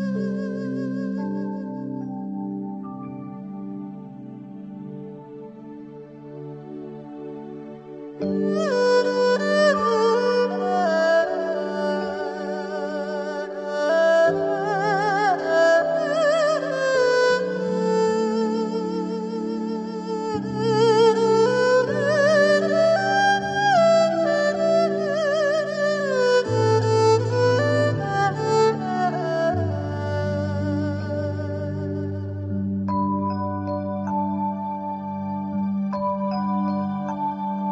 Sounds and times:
Music: 0.0 - 37.7.

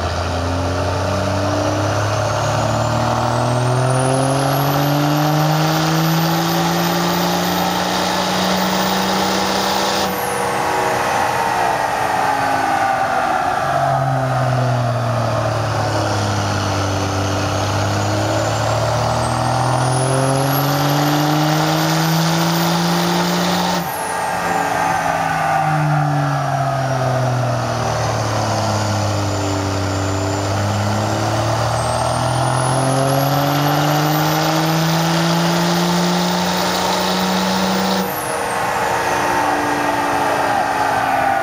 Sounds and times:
Medium engine (mid frequency): 0.0 - 41.4
Truck: 0.0 - 41.4.

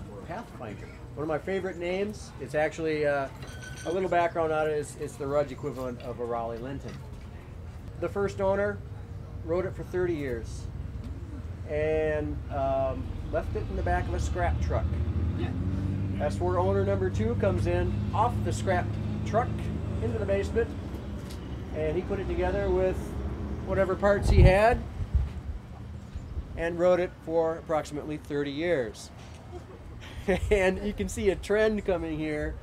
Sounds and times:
Speech: 0.0 - 7.1, 11.7 - 15.5, 16.2 - 20.7, 21.8 - 23.1, 26.6 - 29.1, 30.5 - 32.6.

